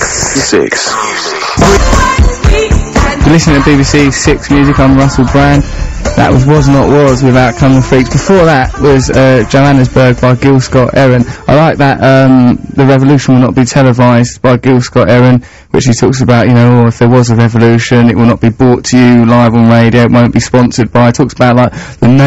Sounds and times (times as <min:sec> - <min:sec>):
Speech: 0:00.0 - 0:01.5, 0:03.2 - 0:05.6, 0:06.2 - 0:22.2.